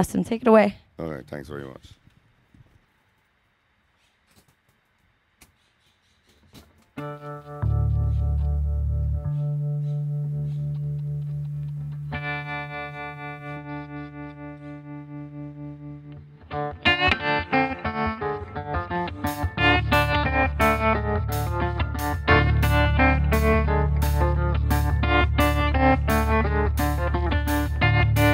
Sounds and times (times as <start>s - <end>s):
Music: 7.0s - 28.3s.